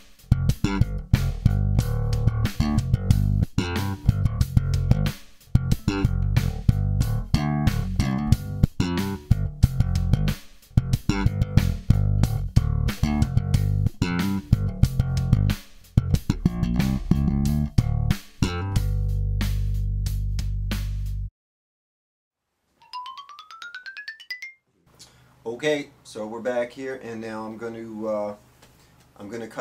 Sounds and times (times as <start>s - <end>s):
Bass guitar: 0.0s - 21.3s
Speech: 25.4s - 28.4s, 29.2s - 29.6s.